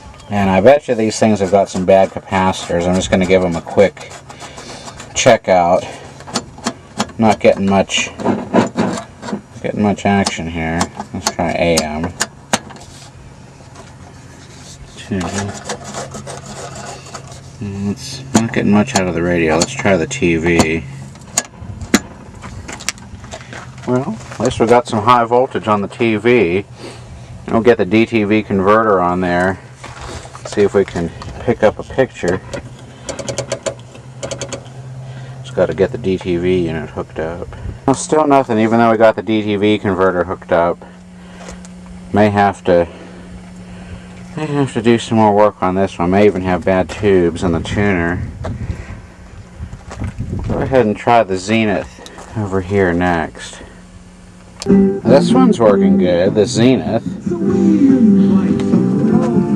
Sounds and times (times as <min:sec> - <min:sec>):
Speech: 0:00.2 - 0:04.1, 0:05.2 - 0:06.0, 0:07.2 - 0:08.2, 0:09.6 - 0:12.2, 0:14.9 - 0:15.6, 0:17.6 - 0:20.9, 0:23.8 - 0:26.7, 0:27.5 - 0:29.6, 0:30.5 - 0:32.4, 0:35.5 - 0:40.8, 0:42.1 - 0:42.9, 0:44.4 - 0:48.3, 0:50.5 - 0:53.6, 0:55.1 - 0:58.6.